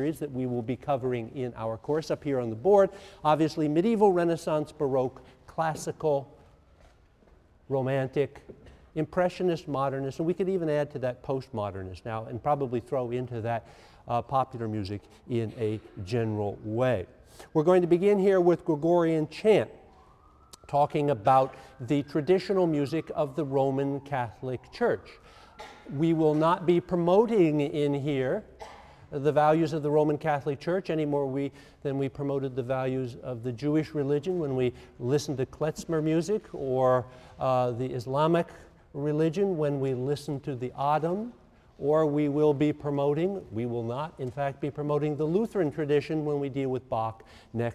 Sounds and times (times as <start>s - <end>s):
Speech: 0.0s - 6.3s, 7.7s - 8.4s, 9.0s - 19.7s, 20.6s - 25.2s, 25.9s - 28.5s, 29.1s - 47.7s.